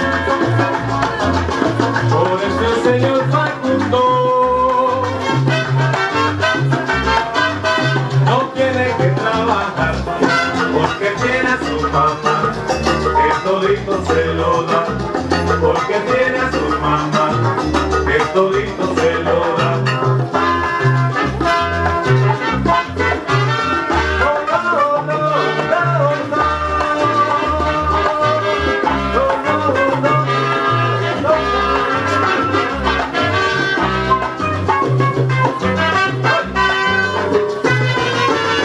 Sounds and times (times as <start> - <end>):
Music: 0.0 - 38.6.